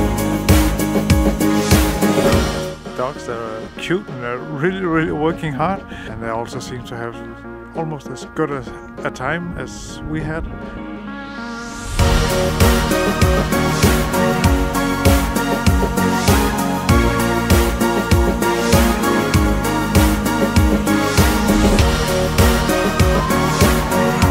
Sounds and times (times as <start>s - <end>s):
Music: 0.0s - 24.3s
Speech: 3.0s - 10.6s.